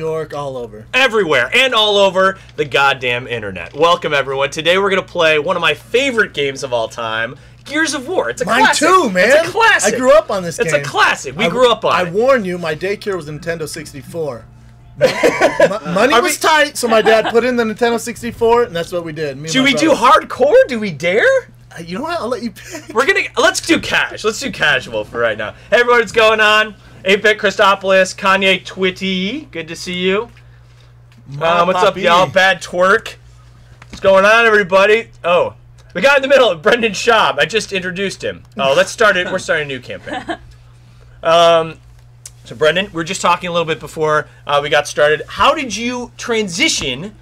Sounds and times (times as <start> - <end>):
Speech: 0.0 - 14.4, 15.7 - 30.3, 31.3 - 33.2, 34.0 - 40.0, 42.4 - 47.2.